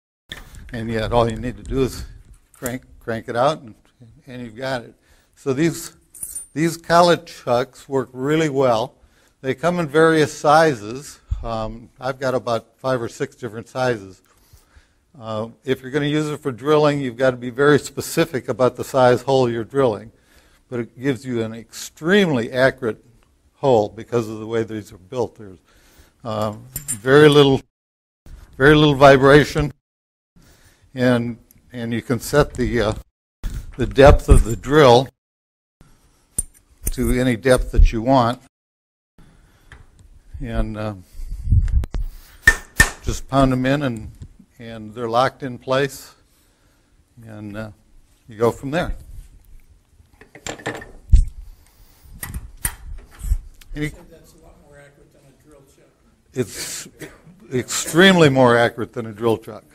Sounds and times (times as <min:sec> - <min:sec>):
Speech: 0:00.8 - 0:06.0, 0:06.6 - 0:14.2, 0:15.2 - 0:20.1, 0:20.7 - 0:23.0, 0:23.6 - 0:25.6, 0:26.2 - 0:27.6, 0:28.6 - 0:29.8, 0:31.0 - 0:33.0, 0:33.8 - 0:35.1, 0:36.9 - 0:38.5, 0:40.4 - 0:41.0, 0:43.0 - 0:46.2, 0:47.2 - 0:49.0, 0:53.7 - 0:59.7.